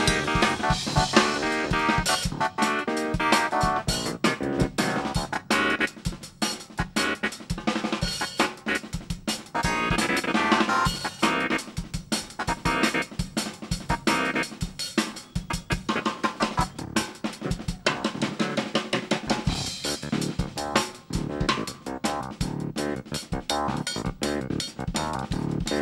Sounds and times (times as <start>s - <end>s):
Bass drum: 0.0s - 2.6s, 3.2s - 11.4s, 16.5s - 18.4s, 19.2s - 25.8s
Drum kit: 0.0s - 25.8s
Drum roll: 0.0s - 25.8s.